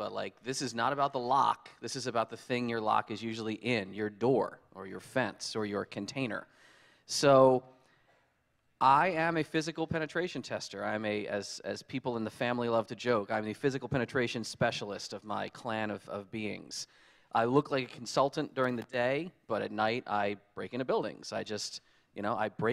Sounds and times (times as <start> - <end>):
Speech: 0.0 - 6.5, 7.1 - 7.6, 8.8 - 22.7.